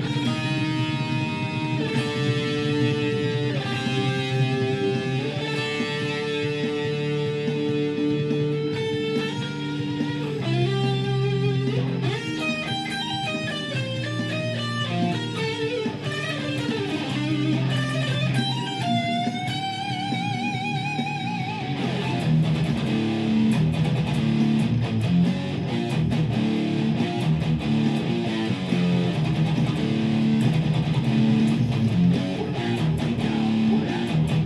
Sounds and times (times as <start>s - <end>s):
Electric guitar: 0.0s - 34.4s
Strum: 0.0s - 34.4s.